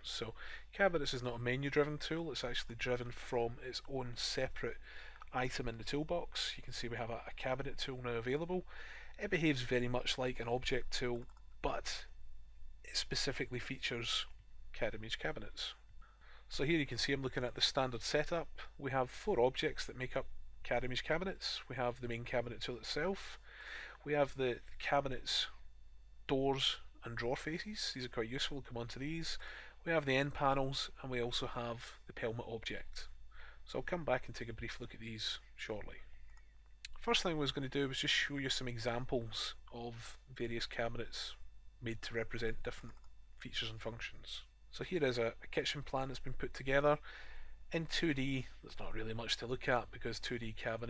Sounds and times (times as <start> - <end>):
Speech: 0.0 - 12.1, 12.9 - 15.8, 16.5 - 23.4, 24.0 - 25.6, 26.3 - 33.1, 33.7 - 36.1, 36.9 - 47.1, 47.7 - 50.8.